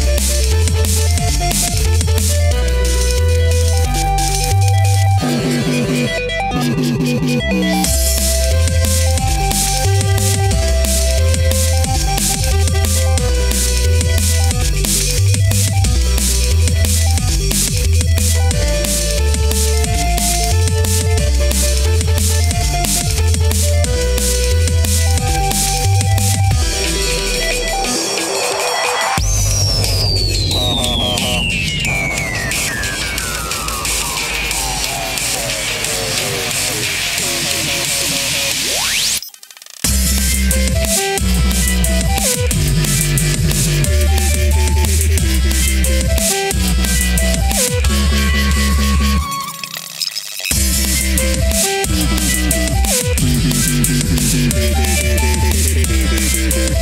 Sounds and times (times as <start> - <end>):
Music: 0.0 - 56.8.